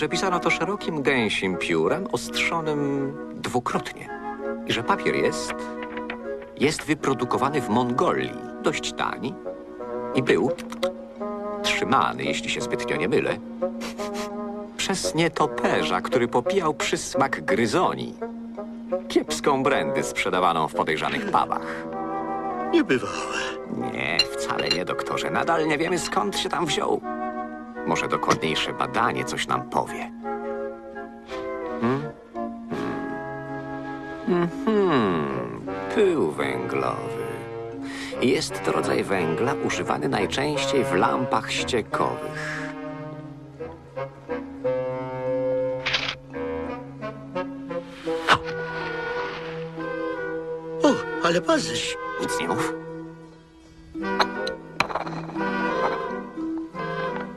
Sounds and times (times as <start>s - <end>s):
Speech: 0.0s - 4.1s, 6.6s - 9.4s, 10.2s - 10.7s, 11.7s - 13.4s, 14.8s - 18.2s, 19.1s - 21.7s, 22.8s - 27.0s, 27.9s - 30.1s, 34.4s - 37.4s, 38.2s - 42.6s, 50.8s - 52.8s
Music: 0.0s - 57.3s.